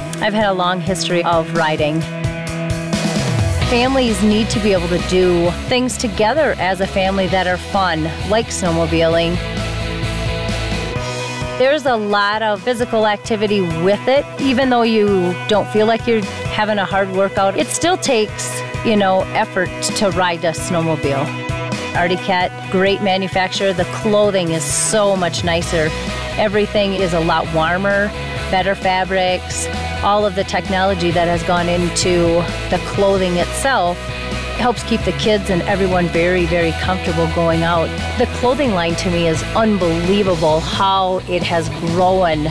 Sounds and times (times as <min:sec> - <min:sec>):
Music: 0:00.0 - 0:42.5
Speech: 0:00.2 - 0:02.1, 0:03.6 - 0:09.4, 0:11.6 - 0:21.3, 0:22.0 - 0:34.0, 0:34.6 - 0:42.5.